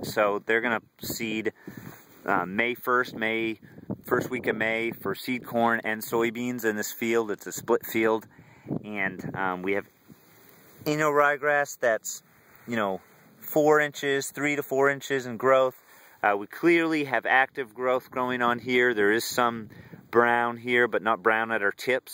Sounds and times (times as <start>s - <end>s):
Speech: 0.0s - 1.6s, 2.2s - 9.9s, 10.8s - 22.1s.